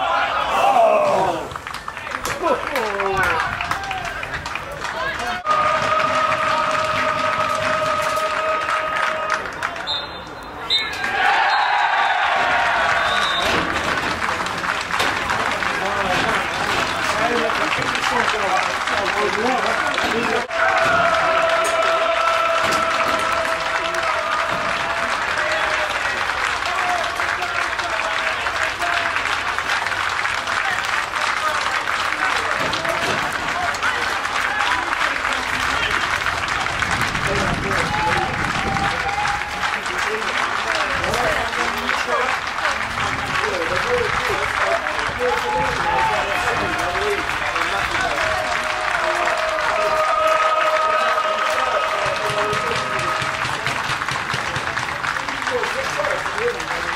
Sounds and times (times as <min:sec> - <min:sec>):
Applause: 0:01.1 - 0:09.9, 0:11.4 - 0:56.9.